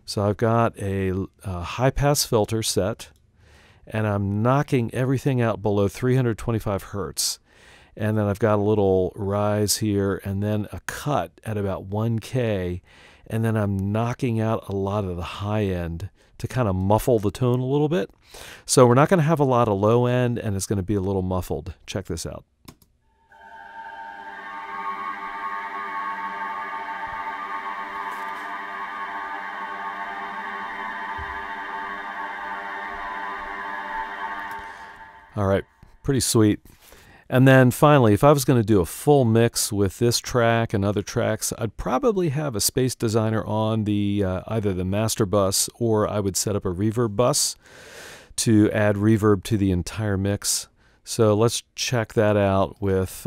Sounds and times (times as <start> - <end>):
Speech: 0.0 - 3.1, 3.9 - 7.4, 8.0 - 22.4, 35.4 - 36.6, 37.3 - 47.6, 48.4 - 53.2
Music: 23.3 - 35.7.